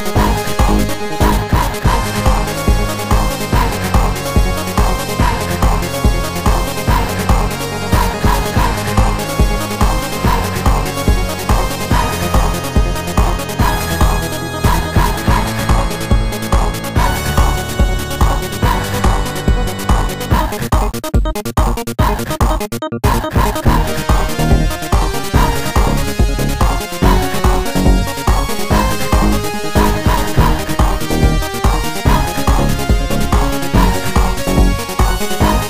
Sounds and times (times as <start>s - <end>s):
Music: 0.0s - 35.6s.